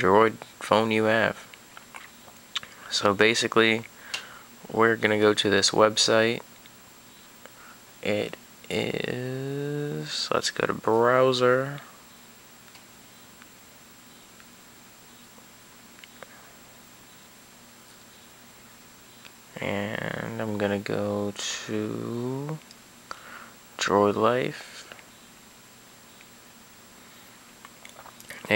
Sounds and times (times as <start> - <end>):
Speech: 0.0 - 1.5, 2.9 - 3.9, 4.7 - 6.4, 8.0 - 11.9, 19.6 - 22.6, 23.8 - 24.9, 28.3 - 28.5.